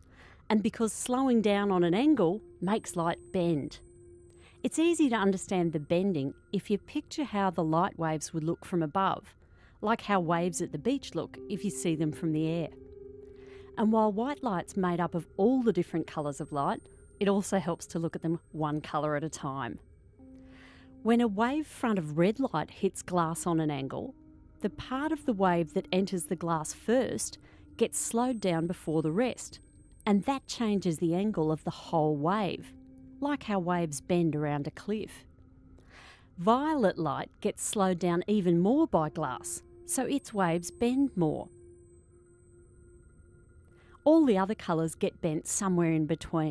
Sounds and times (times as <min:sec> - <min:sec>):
Speech: 0:00.5 - 0:03.8, 0:04.6 - 0:12.7, 0:13.8 - 0:19.8, 0:21.1 - 0:35.2, 0:36.4 - 0:41.5, 0:44.1 - 0:46.5.